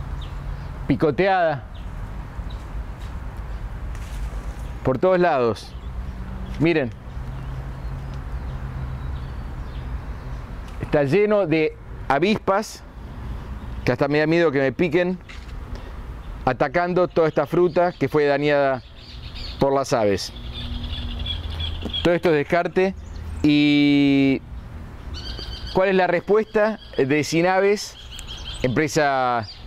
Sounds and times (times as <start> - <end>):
Male speech, man speaking: 0.9 - 1.7, 4.8 - 5.7, 6.6 - 7.0, 10.8 - 12.8, 13.9 - 15.2, 16.5 - 18.8, 19.6 - 20.4, 22.0 - 24.4, 25.7 - 28.0, 28.6 - 29.5
Bird: 3.5 - 11.0, 15.2 - 29.6.